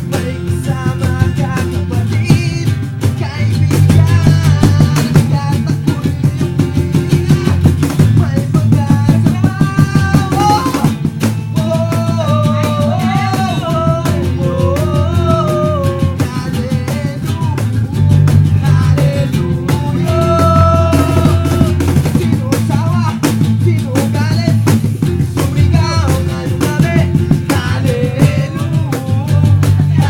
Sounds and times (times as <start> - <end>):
Guitar: 0.0 - 30.0
Singing: 0.0 - 30.0.